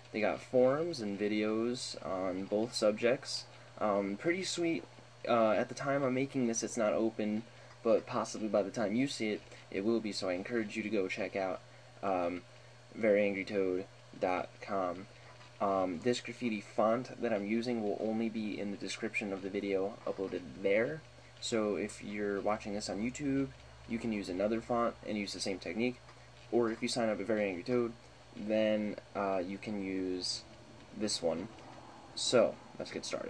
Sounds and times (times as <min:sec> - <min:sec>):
Speech: 0:00.1 - 0:31.5, 0:32.2 - 0:33.2.